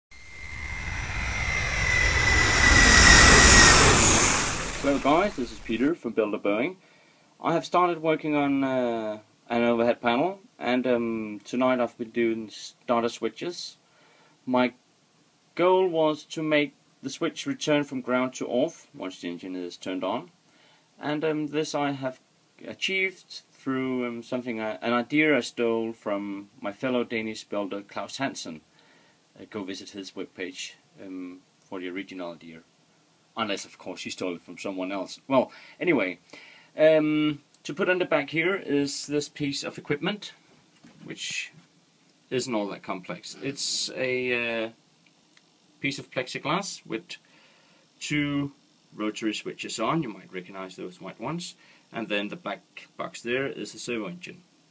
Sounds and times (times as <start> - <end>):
Aircraft: 0.1 - 5.9
Speech: 4.8 - 6.8, 7.4 - 13.8, 14.5 - 14.8, 15.6 - 20.3, 21.0 - 28.6, 29.4 - 32.7, 33.4 - 36.2, 36.8 - 40.4, 41.0 - 41.6, 42.3 - 44.8, 45.8 - 47.3, 48.0 - 54.4.